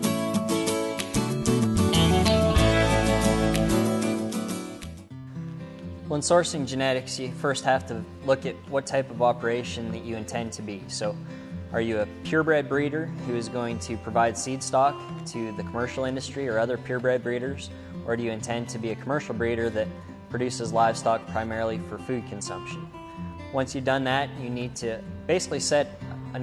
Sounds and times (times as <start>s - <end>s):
Music: 0.0s - 26.4s
Speech: 6.1s - 22.8s, 23.5s - 26.4s.